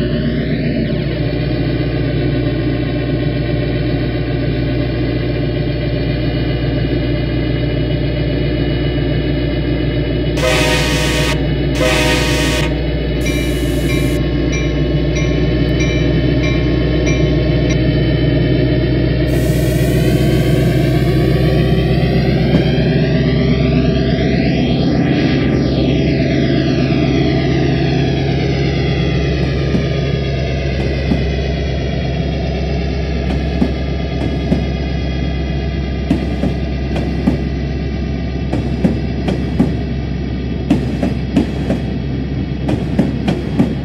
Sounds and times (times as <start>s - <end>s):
Train whistle: 10.4s - 14.2s, 19.3s - 22.7s.